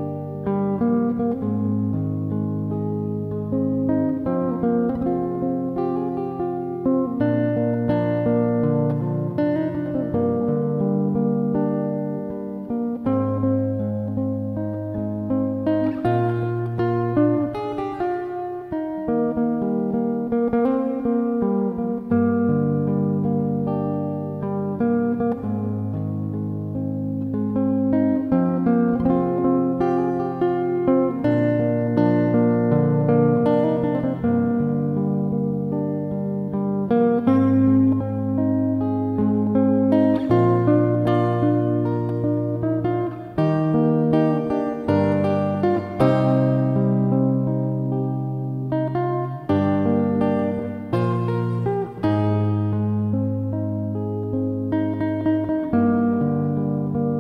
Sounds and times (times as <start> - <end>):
Electric guitar: 0.0 - 57.2.